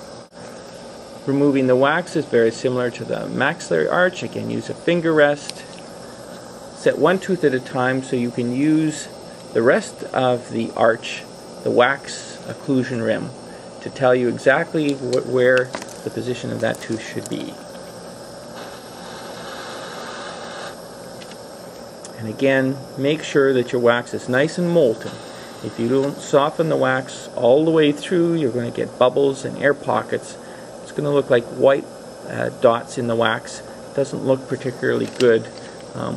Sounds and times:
Speech: 1.2 - 5.7, 6.8 - 17.6, 22.1 - 36.1.

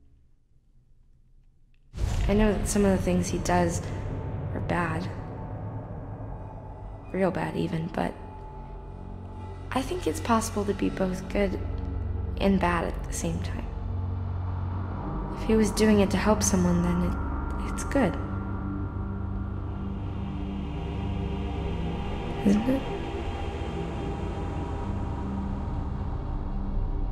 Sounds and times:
Narration, monologue: 2.0 - 5.5, 6.5 - 13.9, 15.4 - 18.4, 22.4 - 23.0
Music: 2.0 - 27.1
Female speech, woman speaking: 2.2 - 3.9, 4.6 - 5.1, 7.2 - 8.2, 9.7 - 11.6, 12.4 - 13.7, 15.4 - 18.2, 22.5 - 22.9.

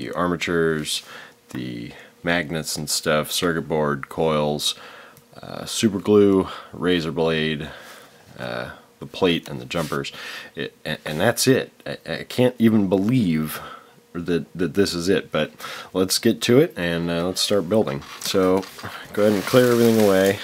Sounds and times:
Speech: 0.0 - 4.8, 5.4 - 20.4.

